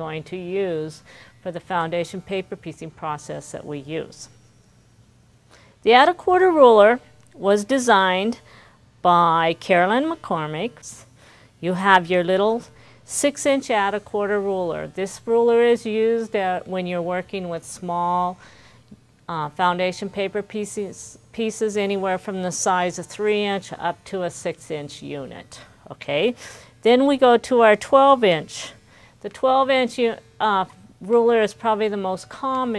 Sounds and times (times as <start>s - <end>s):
Speech: 0.0s - 4.3s, 5.9s - 8.4s, 9.1s - 18.4s, 19.3s - 32.7s.